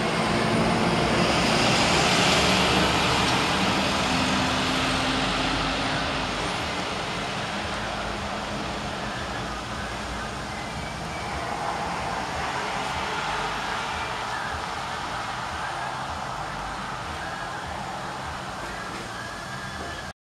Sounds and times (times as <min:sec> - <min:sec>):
Outside, urban or manmade: 0:00.0 - 0:20.2.